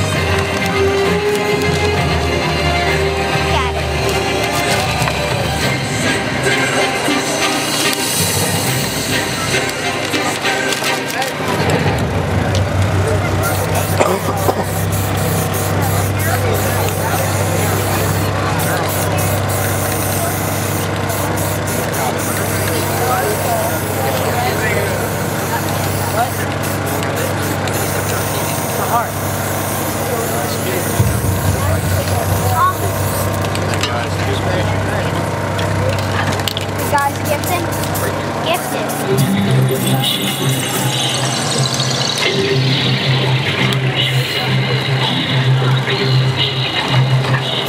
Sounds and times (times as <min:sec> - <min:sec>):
Lawn mower: 0:12.6 - 0:42.4.